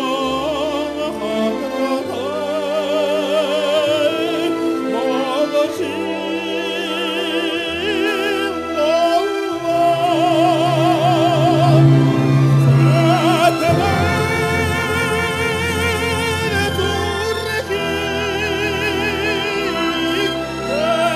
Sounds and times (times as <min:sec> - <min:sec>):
Music: 0:00.0 - 0:21.1.